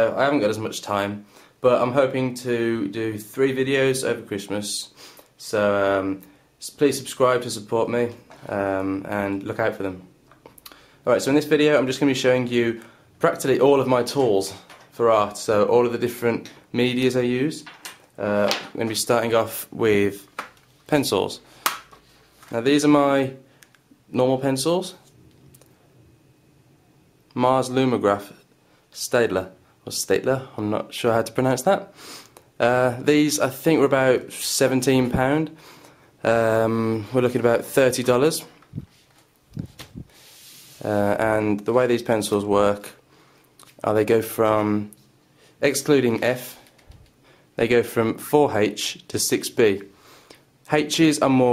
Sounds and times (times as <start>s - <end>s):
Speech: 0.0s - 10.1s, 11.0s - 20.3s, 20.9s - 21.4s, 22.5s - 23.4s, 24.1s - 25.1s, 27.3s - 28.4s, 29.0s - 31.9s, 32.6s - 35.6s, 36.2s - 38.6s, 40.8s - 43.0s, 43.8s - 45.0s, 45.6s - 46.6s, 47.6s - 49.9s, 50.7s - 51.5s.